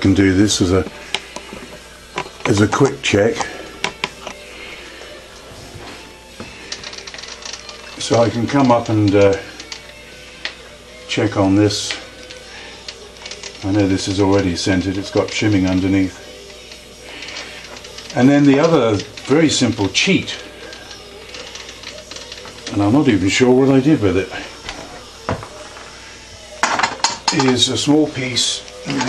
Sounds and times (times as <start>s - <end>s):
Speech: 0.0s - 0.9s, 2.5s - 3.6s, 8.0s - 9.5s, 11.1s - 12.0s, 13.6s - 16.2s, 18.2s - 20.4s, 22.7s - 24.5s, 27.3s - 29.0s
Music: 0.0s - 29.0s.